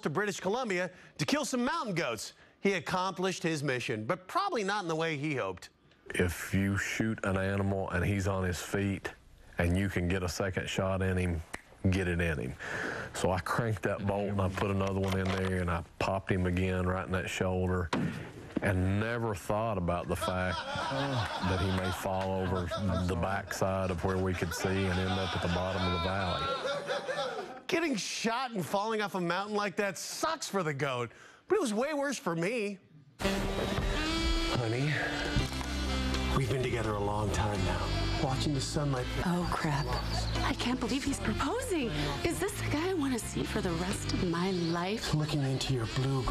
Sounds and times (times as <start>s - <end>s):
Music: 33.2s - 46.3s.